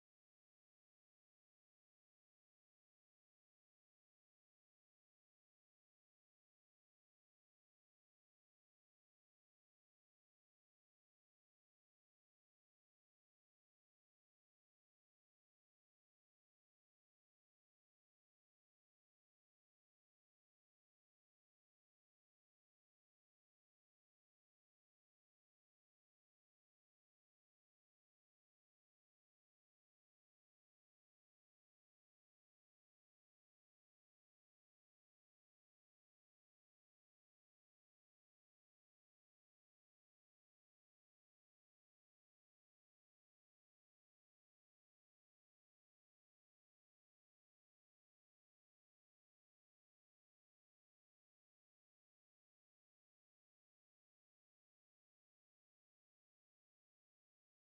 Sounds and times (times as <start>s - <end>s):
Silence: 0.0s - 57.7s.